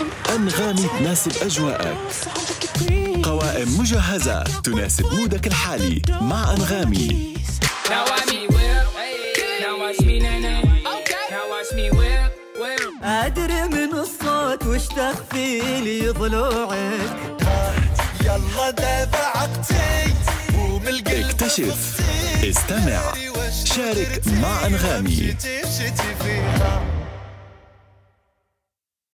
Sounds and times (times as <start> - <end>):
Music: 0.0 - 28.4.